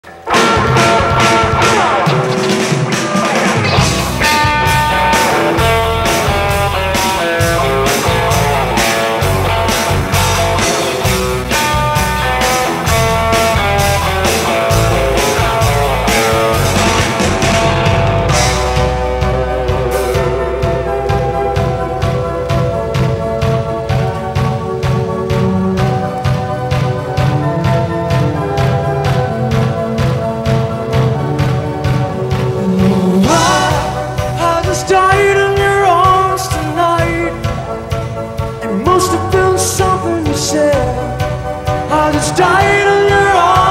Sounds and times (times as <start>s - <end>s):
Rock and roll: 0.0s - 43.7s.